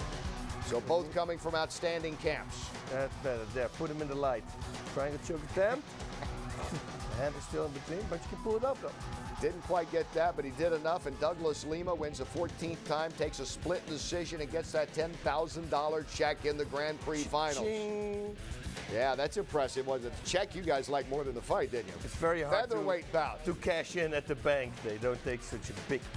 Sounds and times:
Music: 0:00.0 - 0:26.1
Speech: 0:00.7 - 0:04.4, 0:07.2 - 0:26.1.

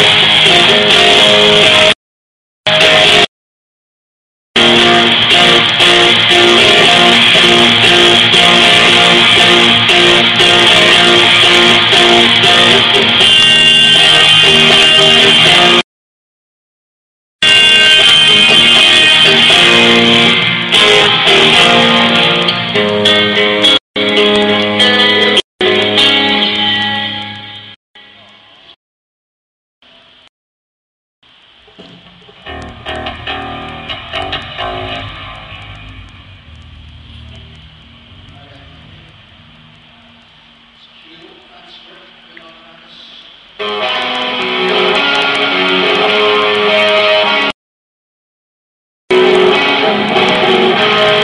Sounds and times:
Music: 0:00.0 - 0:02.0, 0:02.7 - 0:03.3, 0:04.6 - 0:15.8, 0:17.4 - 0:28.4, 0:31.7 - 0:39.2, 0:43.6 - 0:47.5, 0:49.1 - 0:51.2.

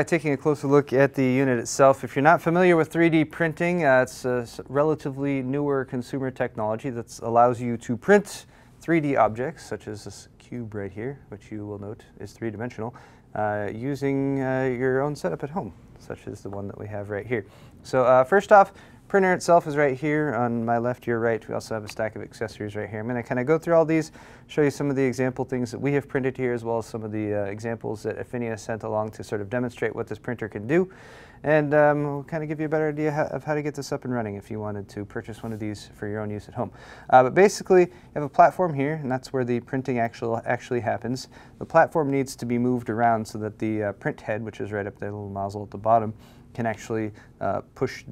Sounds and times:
Speech: 0:00.0 - 0:48.1.

